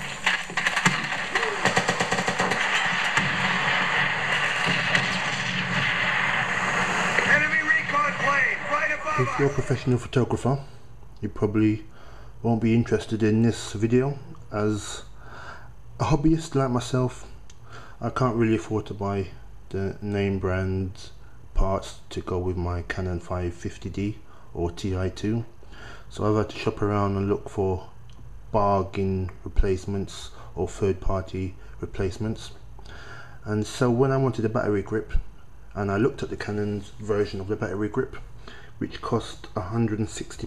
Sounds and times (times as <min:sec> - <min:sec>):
Speech: 0:07.3 - 0:15.1, 0:16.0 - 0:17.4, 0:18.0 - 0:25.5, 0:26.1 - 0:32.6, 0:33.4 - 0:40.4.